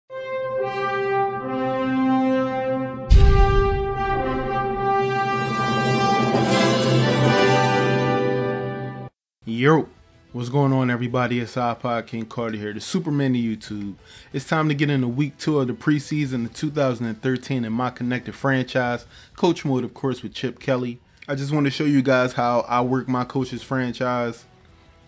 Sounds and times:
Trumpet: 0:00.1 - 0:09.1.

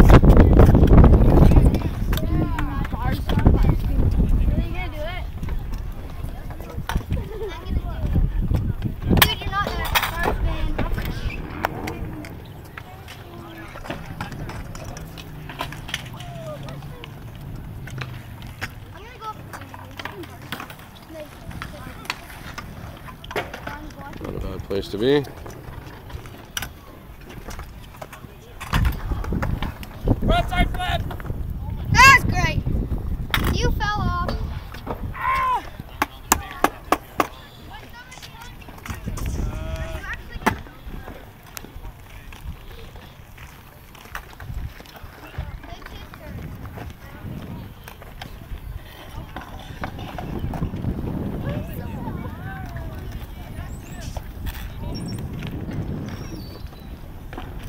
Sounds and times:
Bicycle: 0:00.0 - 0:57.6.

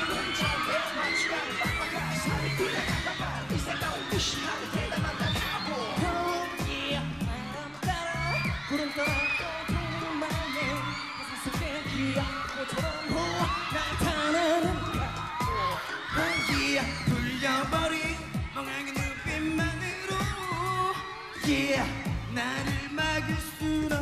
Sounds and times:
Dance music: 0:00.0 - 0:24.0.

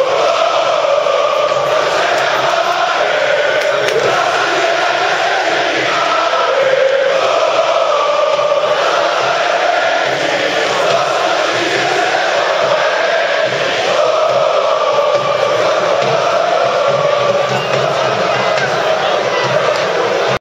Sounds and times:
Choir: 0:00.0 - 0:20.4.

